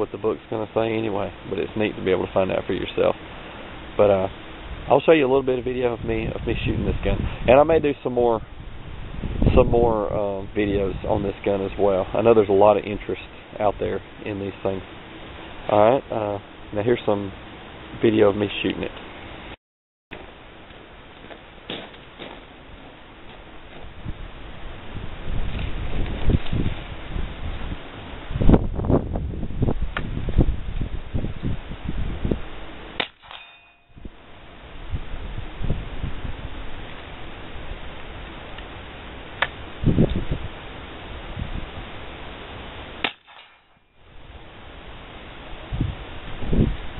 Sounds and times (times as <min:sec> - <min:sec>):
Outside, urban or manmade: 0:00.0 - 0:46.9.